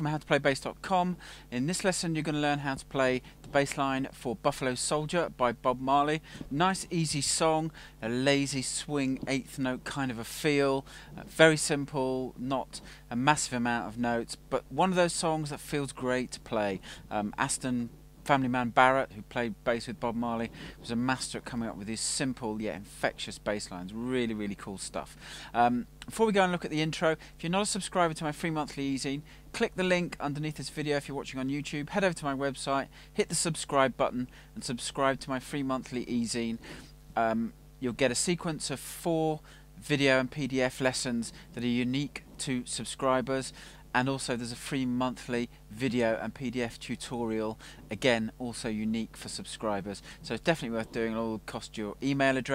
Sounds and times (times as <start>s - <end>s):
Speech: 0.0s - 36.6s, 37.2s - 52.5s.